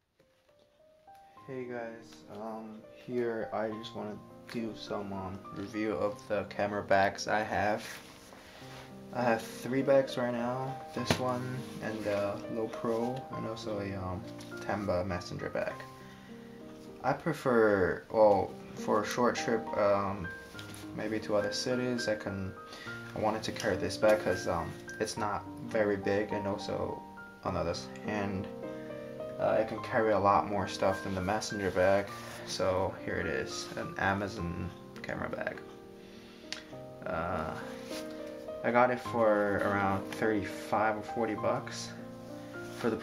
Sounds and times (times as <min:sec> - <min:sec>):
Music: 0:00.0 - 0:43.0
Speech: 0:01.5 - 0:07.9, 0:17.0 - 0:20.2, 0:21.0 - 0:22.5, 0:29.4 - 0:35.6, 0:38.6 - 0:42.0, 0:42.8 - 0:43.0.